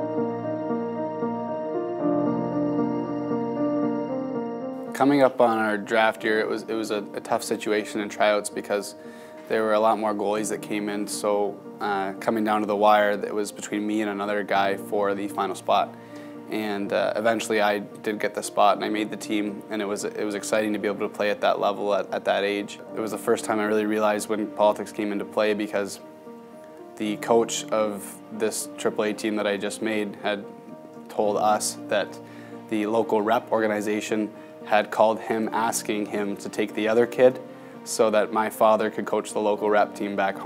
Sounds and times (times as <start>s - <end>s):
Music: 0.0s - 40.4s
Speech: 5.0s - 15.9s, 16.5s - 26.0s, 27.0s - 30.5s, 31.1s - 40.4s.